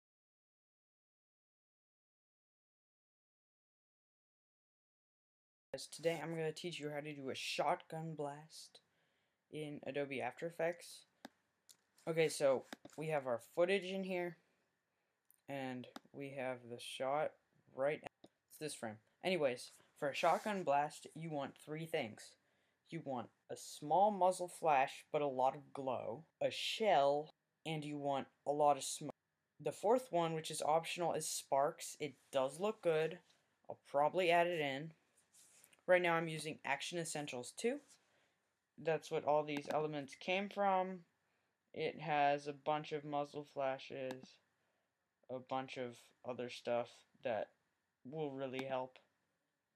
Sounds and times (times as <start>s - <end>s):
Speech: 5.8s - 8.9s, 9.6s - 11.1s, 12.1s - 14.4s, 15.5s - 35.0s, 35.9s - 38.0s, 38.8s - 41.2s, 41.8s - 44.5s, 45.3s - 49.1s.